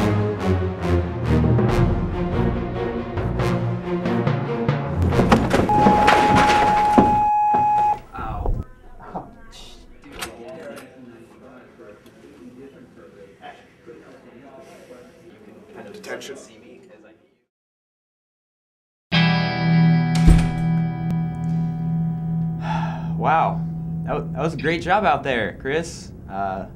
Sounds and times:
Speech: 8.2s - 17.5s, 23.2s - 26.7s.

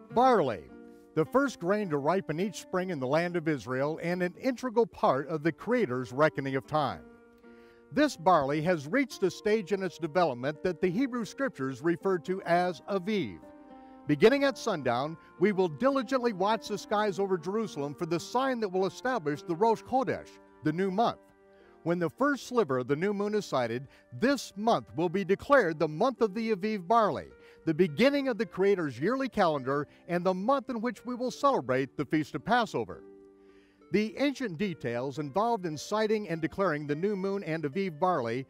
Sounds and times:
Music: 0.0s - 38.5s
Speech: 0.1s - 7.0s, 8.0s - 13.4s, 14.1s - 21.2s, 21.9s - 33.0s, 34.0s - 38.5s.

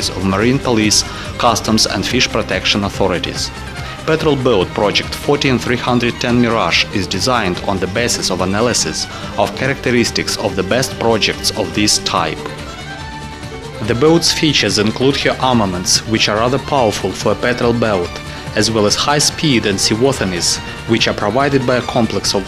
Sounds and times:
Speech: 0.0s - 12.6s, 13.8s - 22.4s
Music: 0.0s - 22.4s.

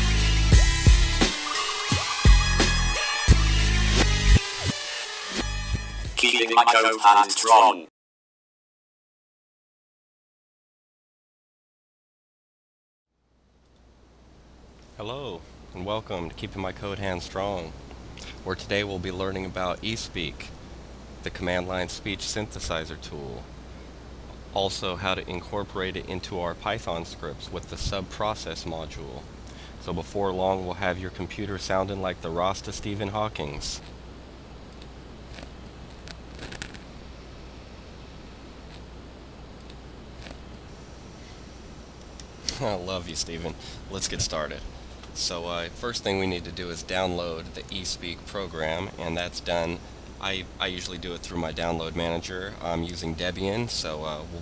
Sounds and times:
Speech: 6.2s - 7.9s, 15.0s - 17.8s, 18.4s - 20.5s, 21.2s - 23.5s, 24.6s - 29.2s, 29.8s - 33.9s, 42.5s - 54.4s.

